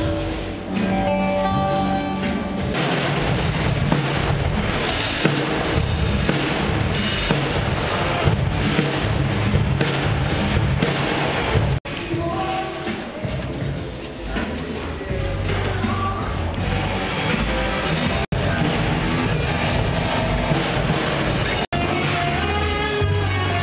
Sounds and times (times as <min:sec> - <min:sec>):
Music: 0:00.0 - 0:23.6.